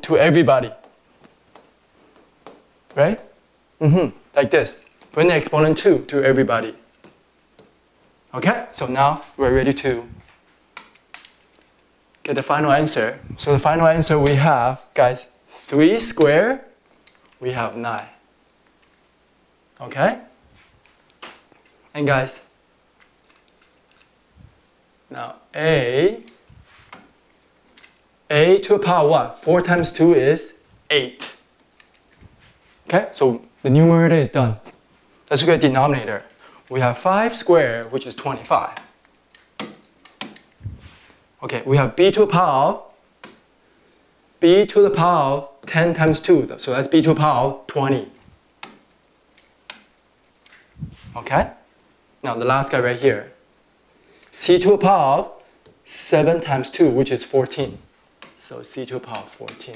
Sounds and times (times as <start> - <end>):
Speech: 0.0 - 0.8, 2.9 - 6.8, 8.3 - 10.2, 12.3 - 16.7, 17.4 - 18.2, 19.8 - 20.4, 21.9 - 22.5, 25.1 - 26.4, 28.3 - 31.4, 32.9 - 38.9, 41.4 - 42.9, 44.4 - 48.2, 50.9 - 51.6, 52.2 - 53.4, 54.3 - 59.7
Inside, small room: 0.0 - 59.7.